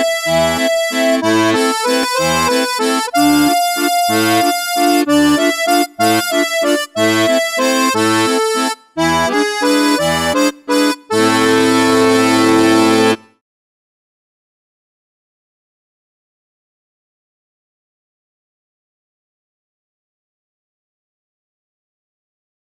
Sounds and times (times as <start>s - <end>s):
Accordion: 0.0s - 13.4s.